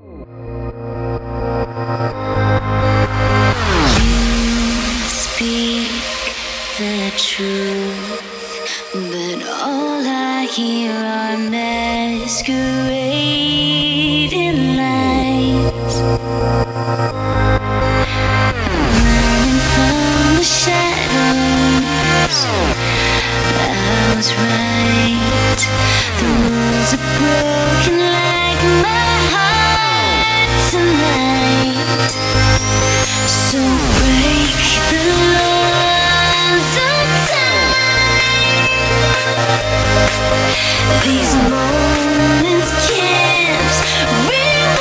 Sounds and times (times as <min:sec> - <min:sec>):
Music: 0:00.0 - 0:44.8.